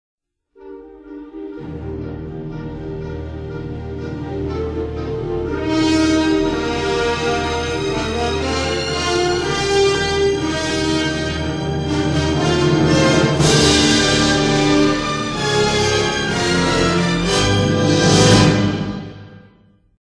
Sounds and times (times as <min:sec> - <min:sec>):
Theme music: 0:00.6 - 0:19.8.